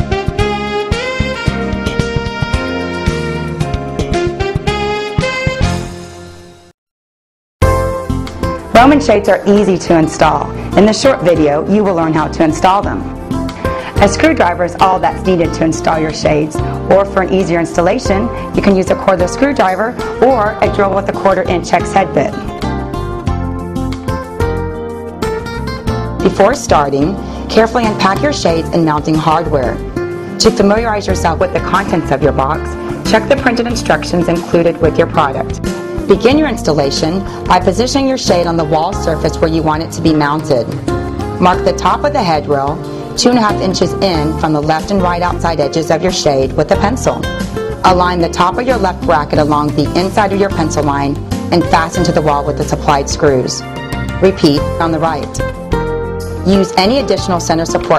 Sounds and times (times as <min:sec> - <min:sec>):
Music: 0:00.0 - 0:06.8, 0:07.6 - 0:57.9
Speech: 0:08.8 - 0:13.0, 0:14.0 - 0:22.4, 0:26.3 - 0:29.8, 0:30.4 - 0:35.5, 0:36.1 - 0:40.7, 0:41.4 - 0:47.3, 0:47.9 - 0:53.6, 0:54.2 - 0:55.4, 0:56.5 - 0:57.9.